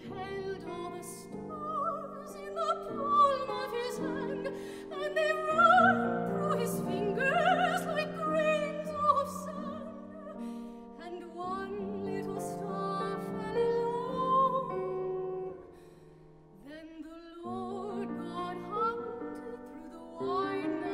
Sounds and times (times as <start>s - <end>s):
Classical music: 0.0s - 20.9s
Piano: 0.0s - 20.9s.